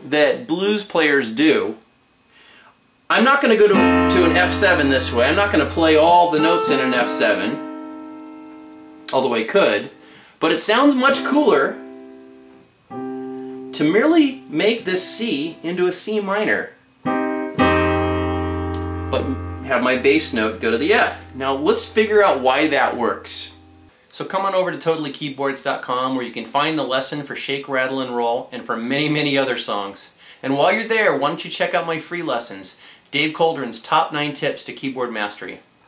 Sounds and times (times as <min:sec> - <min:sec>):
Speech: 0:00.0 - 0:01.8, 0:03.1 - 0:07.6, 0:09.1 - 0:11.8, 0:13.8 - 0:16.8, 0:19.2 - 0:35.7
Electric piano: 0:03.7 - 0:10.0, 0:11.1 - 0:15.8, 0:17.0 - 0:23.9.